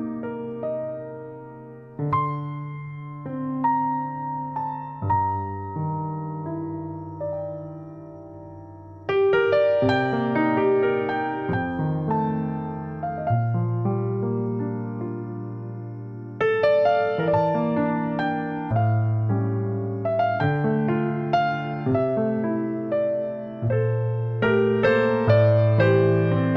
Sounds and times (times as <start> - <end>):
Music: 0.0 - 26.5.